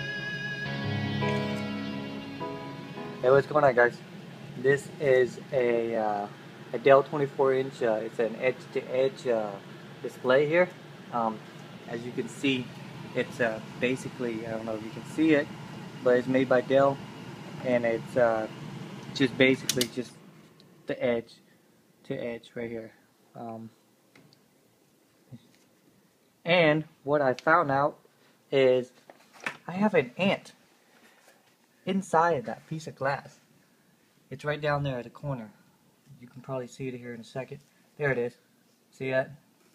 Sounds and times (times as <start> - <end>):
Speech: 3.2 - 4.0, 4.6 - 17.0, 17.6 - 18.6, 19.2 - 20.2, 20.9 - 21.4, 22.0 - 23.8, 26.4 - 29.0, 29.6 - 30.6, 31.9 - 33.4, 34.3 - 39.4.